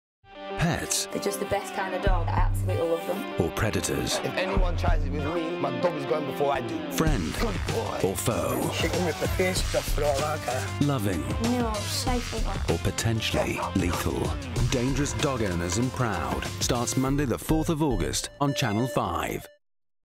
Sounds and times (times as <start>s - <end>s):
Music: 0.3s - 19.6s
Speech: 0.6s - 19.5s
Bow-wow: 13.4s - 14.0s.